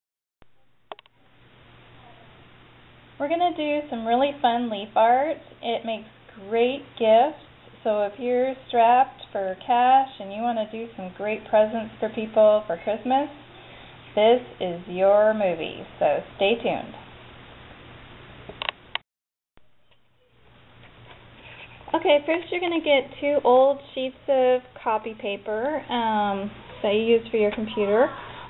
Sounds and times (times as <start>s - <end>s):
Speech: 3.2s - 13.4s, 14.2s - 17.0s, 21.9s - 28.3s.